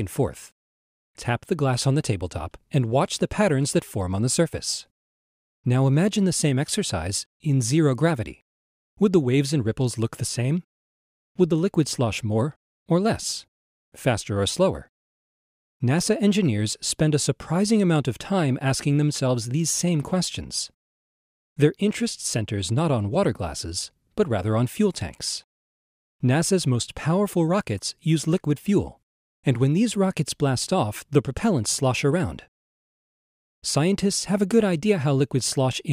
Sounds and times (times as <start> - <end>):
Speech: 0.0 - 0.6, 1.2 - 4.9, 5.7 - 8.4, 9.0 - 10.7, 11.4 - 14.9, 15.8 - 20.8, 21.6 - 25.5, 26.2 - 32.5, 33.6 - 35.9.